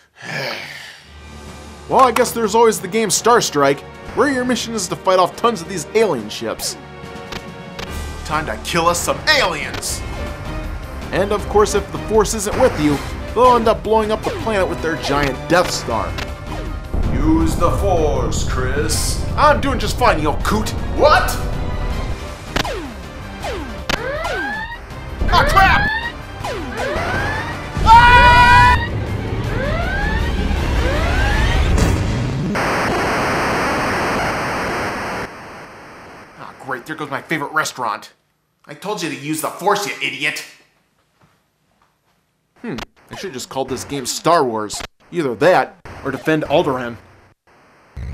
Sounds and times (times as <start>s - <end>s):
Music: 1.0s - 32.4s
Speech: 8.3s - 10.0s, 11.1s - 16.1s, 17.1s - 21.4s, 36.4s - 40.6s, 42.7s - 47.0s.